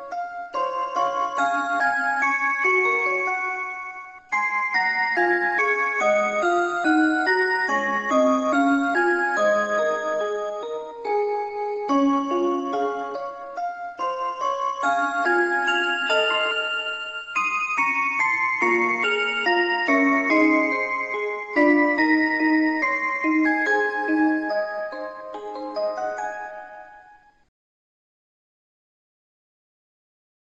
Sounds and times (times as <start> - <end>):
Music: 0.0 - 27.5.